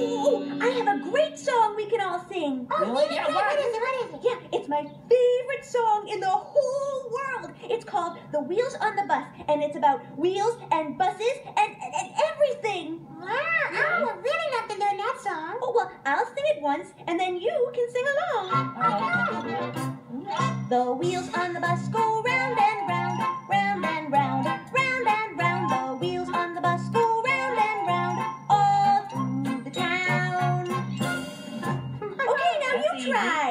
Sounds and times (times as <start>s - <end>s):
Music: 18.4s - 32.2s.